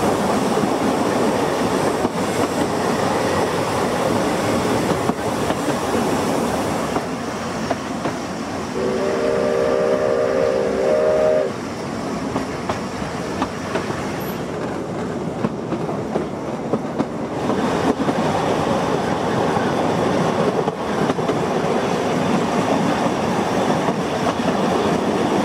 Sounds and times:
Railroad car, train wagon: 0.0 - 25.4
Train: 0.0 - 25.4.

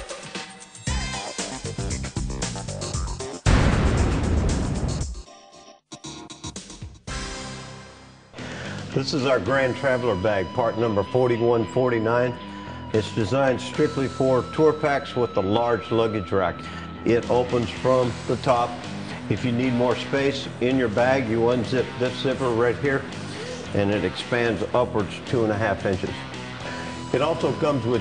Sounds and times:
Music: 0.0 - 28.0
Speech: 8.9 - 12.4, 13.0 - 23.1, 23.7 - 26.2, 27.1 - 28.0.

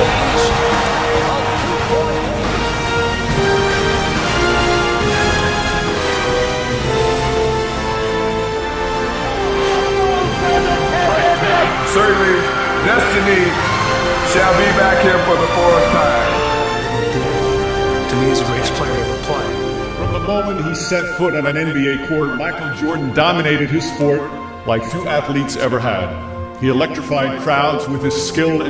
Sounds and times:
Music: 0.0 - 28.6
Speech: 18.1 - 19.5, 20.1 - 28.6.

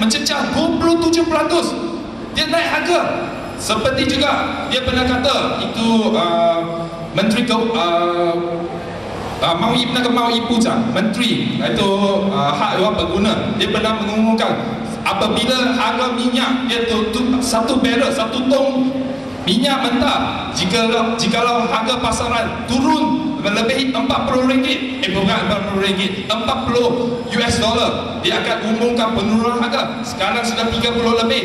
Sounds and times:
Speech: 0.0 - 8.8, 9.4 - 31.4.

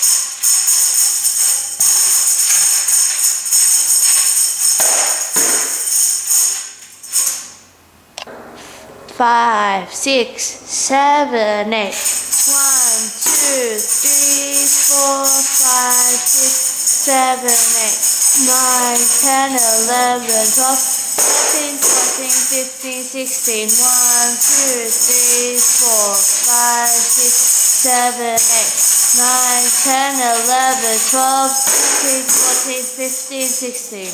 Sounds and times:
Tambourine: 0.0 - 7.6, 12.0 - 34.1
Speech: 9.1 - 16.4, 17.0 - 20.8, 21.4 - 34.1.

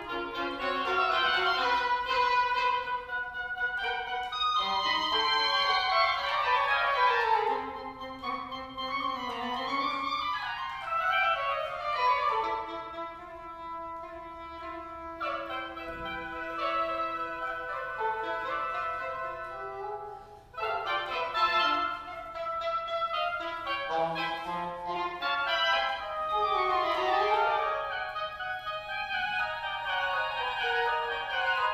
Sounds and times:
Traditional music: 0.0 - 31.7.

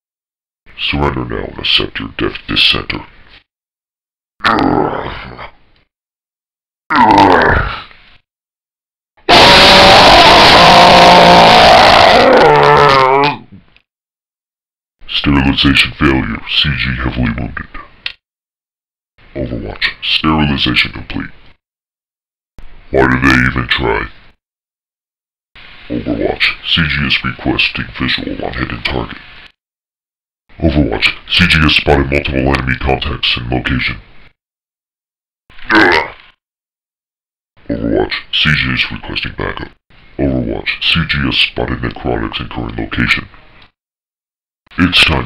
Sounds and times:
Speech: 0.7 - 3.1, 15.0 - 18.0, 19.3 - 21.4, 22.9 - 24.2, 25.9 - 29.2, 30.6 - 34.0, 35.7 - 36.2, 37.6 - 43.4, 44.7 - 45.2.

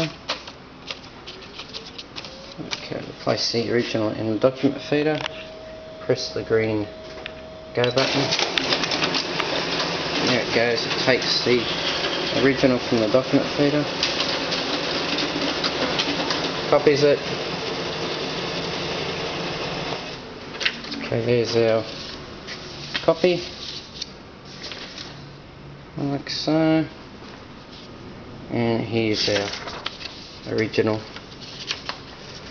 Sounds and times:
Speech: 2.6 - 5.3, 6.0 - 6.9, 7.8 - 8.4, 10.2 - 11.8, 12.4 - 14.0, 16.7 - 17.3, 21.0 - 21.9, 23.0 - 23.5, 26.0 - 27.0, 28.5 - 29.6, 30.5 - 31.1
Printer: 3.9 - 20.3.

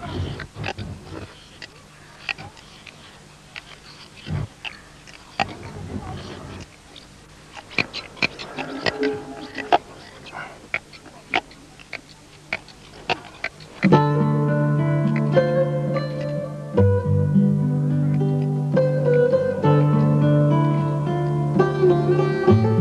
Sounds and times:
Music: 13.9 - 22.8.

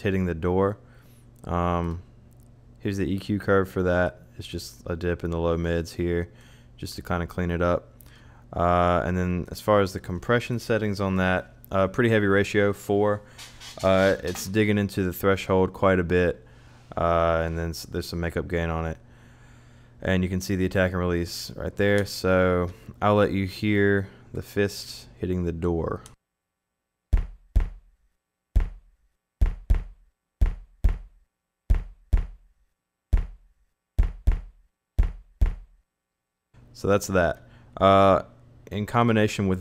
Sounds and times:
Speech: 0.0 - 0.8, 1.4 - 2.0, 2.8 - 7.9, 8.5 - 19.0, 20.0 - 26.2, 36.8 - 39.6.

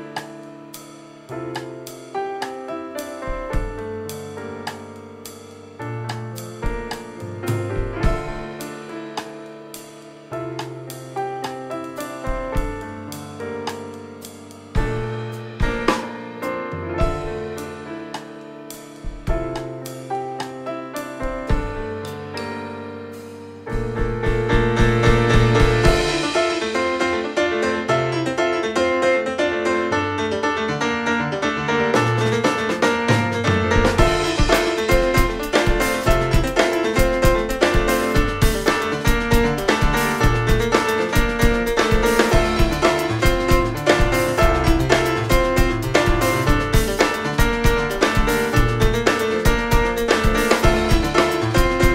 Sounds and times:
Music: 0.0 - 51.9.

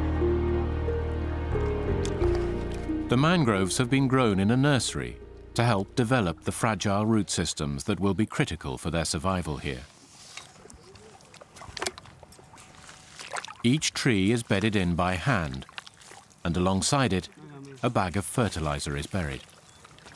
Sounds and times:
Speech: 3.1 - 9.9, 13.7 - 15.6, 16.4 - 19.4.

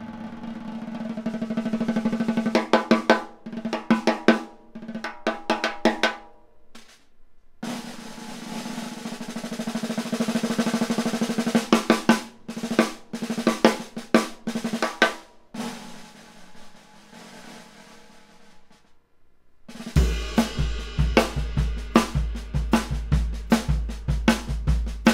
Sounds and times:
Drum: 0.0 - 7.0, 7.6 - 19.0, 19.7 - 25.1
Drum kit: 0.0 - 19.0, 19.7 - 25.1.

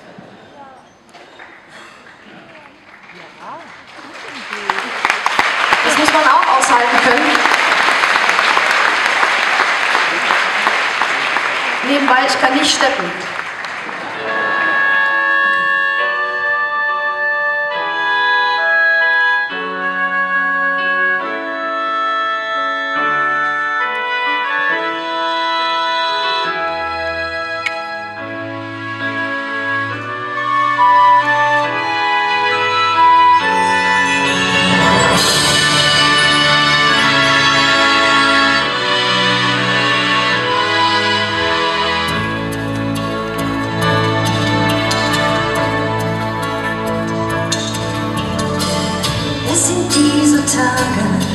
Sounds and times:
Music: 5.0 - 51.3.

